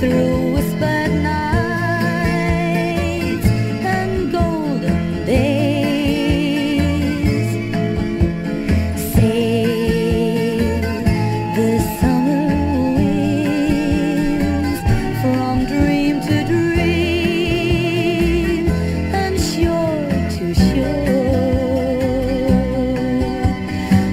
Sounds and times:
Music: 0.0 - 24.1.

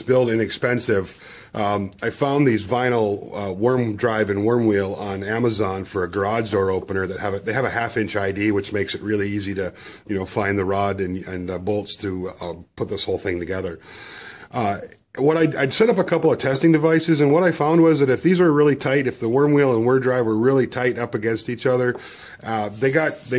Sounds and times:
Speech: 0.0 - 13.8, 14.5 - 23.3.

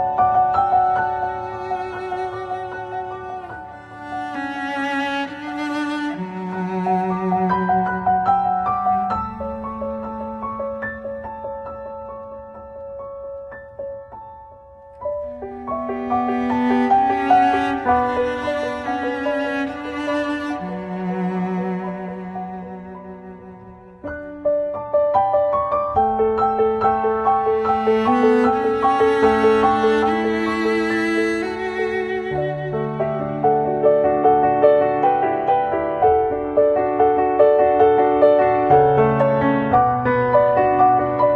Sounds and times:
String section: 0.0 - 11.7, 15.0 - 25.2, 25.9 - 41.3
Cello: 0.0 - 41.3.

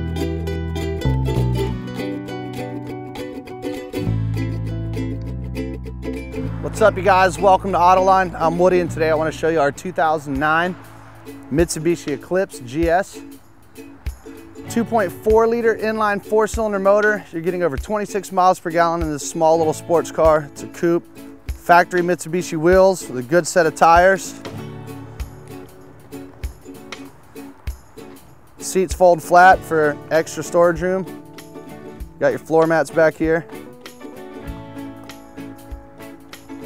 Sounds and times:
Music: 0.0 - 36.6
Speech: 6.6 - 10.8, 11.5 - 13.2, 14.7 - 21.0, 21.7 - 24.4, 28.6 - 31.1, 32.2 - 33.5.

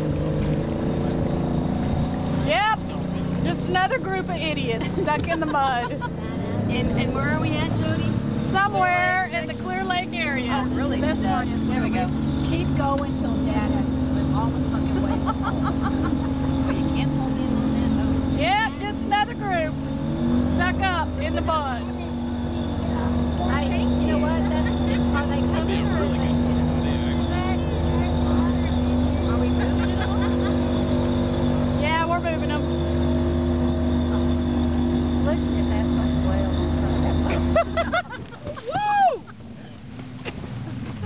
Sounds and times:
Motorboat, speedboat: 0.0 - 41.0
Speech: 2.4 - 15.2.

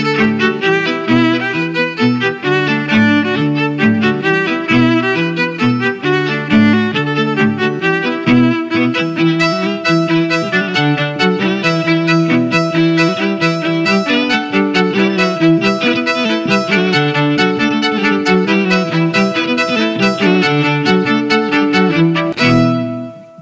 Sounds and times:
Violin, fiddle: 0.0 - 23.4.

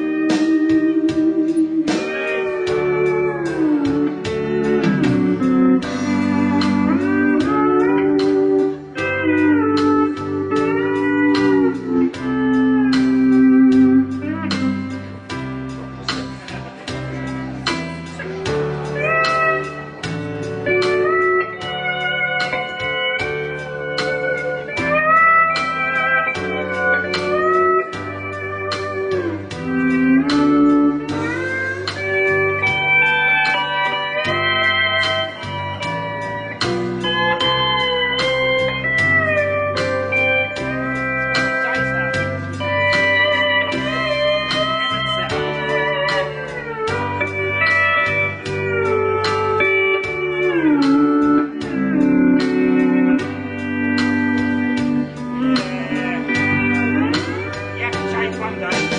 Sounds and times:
Steel guitar, slide guitar: 0.0 - 58.9.

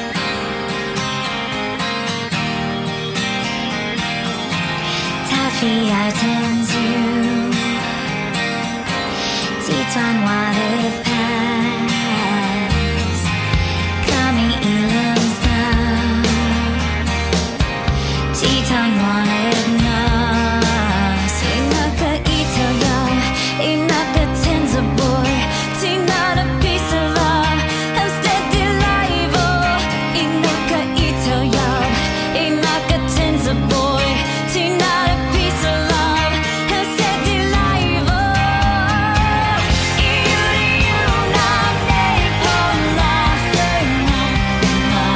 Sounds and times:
Music: 0.0 - 45.1.

